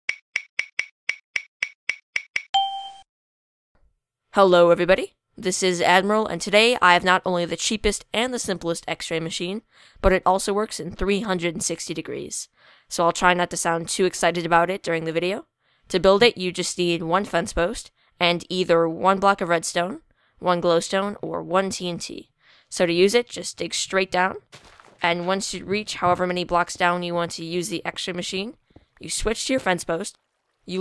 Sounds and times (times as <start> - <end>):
Chink, clink: 2.6 - 3.0
Speech: 4.4 - 30.8.